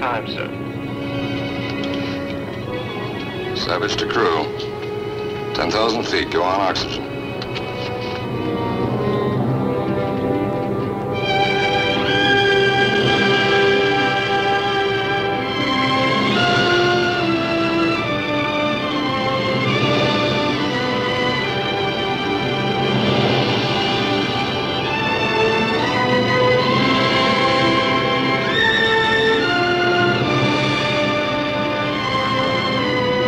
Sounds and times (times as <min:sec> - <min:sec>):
Music: 0:00.0 - 0:33.2.